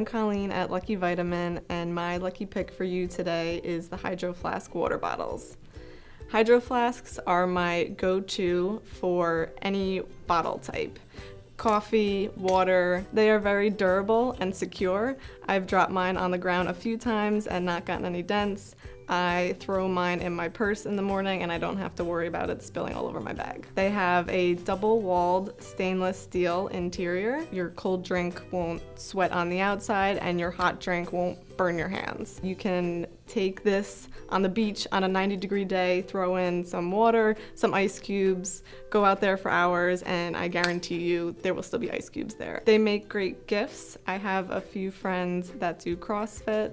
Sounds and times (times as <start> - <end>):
Speech: 0.0 - 5.6, 6.3 - 11.0, 11.6 - 46.7
Music: 0.0 - 46.7.